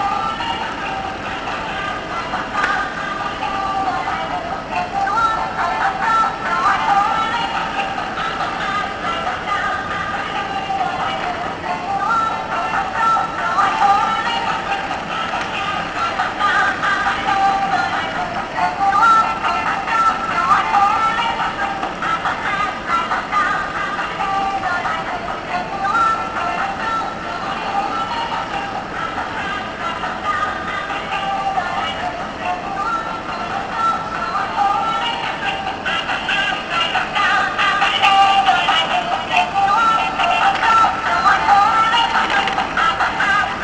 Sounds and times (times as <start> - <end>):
Music: 0.0 - 43.6.